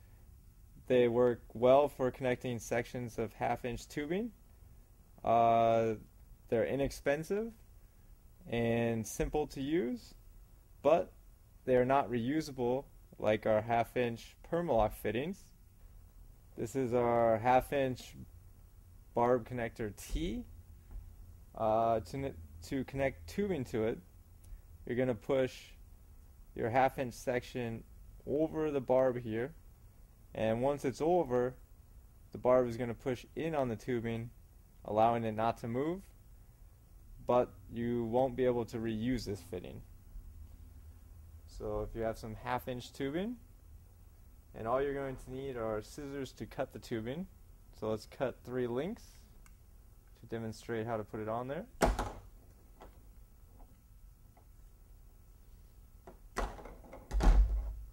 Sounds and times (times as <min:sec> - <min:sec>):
Speech: 0:00.8 - 0:04.4, 0:05.2 - 0:07.6, 0:08.5 - 0:10.2, 0:10.8 - 0:11.1, 0:11.7 - 0:15.5, 0:16.6 - 0:18.3, 0:19.2 - 0:20.5, 0:21.6 - 0:24.0, 0:24.9 - 0:25.8, 0:26.6 - 0:29.6, 0:30.3 - 0:31.6, 0:32.4 - 0:36.2, 0:37.2 - 0:39.9, 0:41.5 - 0:43.4, 0:44.5 - 0:49.3, 0:50.2 - 0:51.8.